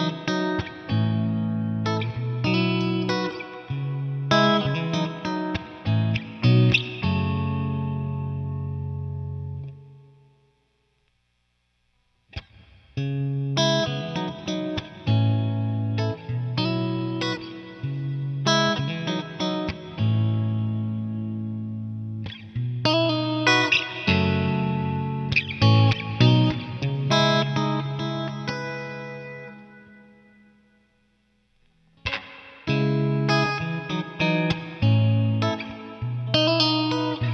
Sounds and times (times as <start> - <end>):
Music: 0.0 - 10.6, 12.3 - 37.3.